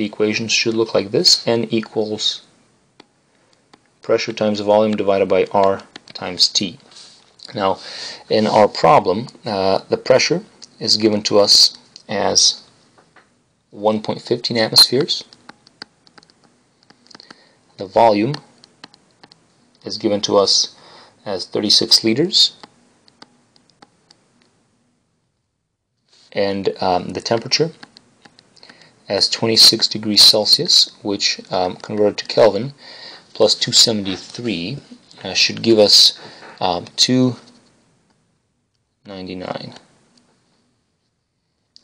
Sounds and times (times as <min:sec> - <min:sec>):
Speech: 0:00.0 - 0:02.5, 0:04.0 - 0:12.7, 0:13.7 - 0:15.4, 0:17.8 - 0:18.5, 0:19.8 - 0:22.6, 0:26.3 - 0:27.8, 0:29.1 - 0:37.6, 0:39.0 - 0:39.9.